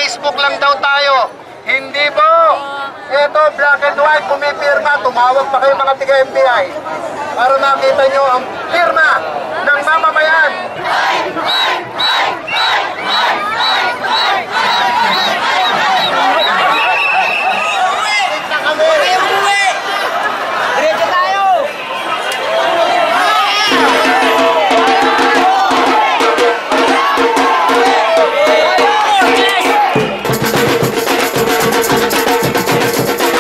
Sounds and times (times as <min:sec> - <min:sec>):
Chatter: 0:00.0 - 0:33.4
Music: 0:23.7 - 0:33.4.